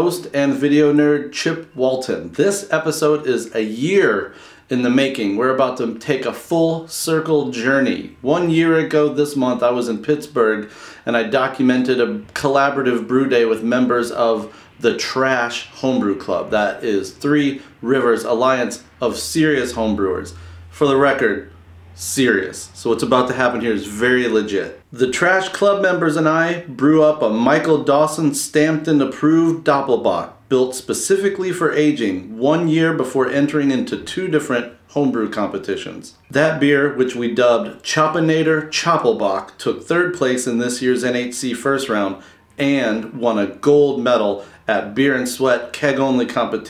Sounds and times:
Speech: 0.0s - 46.7s.

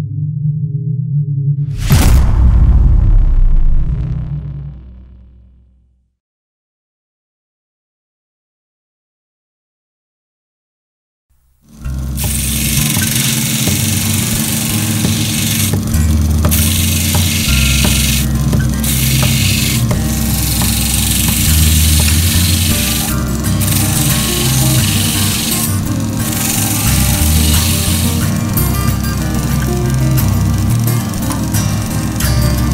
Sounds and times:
Music: 11.6s - 32.7s.

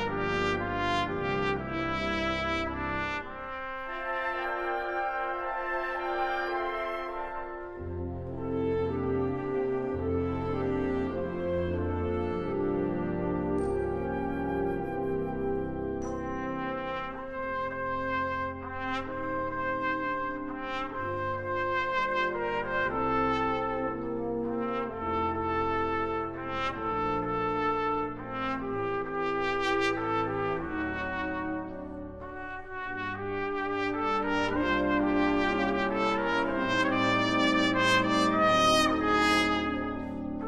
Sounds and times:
Trumpet: 0.0s - 40.4s.

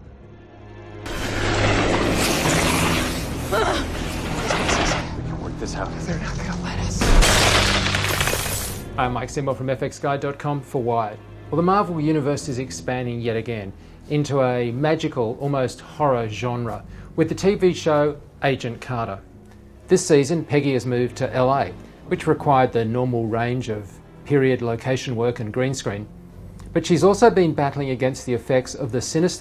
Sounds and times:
Music: 0.0s - 29.4s
Shatter: 7.0s - 8.9s
Speech: 9.0s - 19.2s, 26.8s - 29.4s.

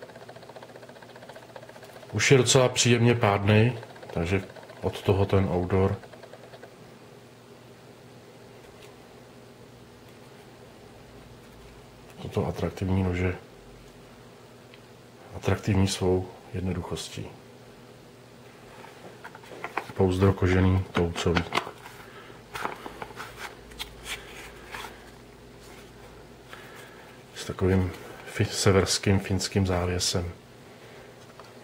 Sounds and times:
Inside, small room: 0.0s - 31.6s
Speech: 2.1s - 6.0s, 12.1s - 13.5s, 15.3s - 17.4s, 19.9s - 21.6s, 27.4s - 30.4s.

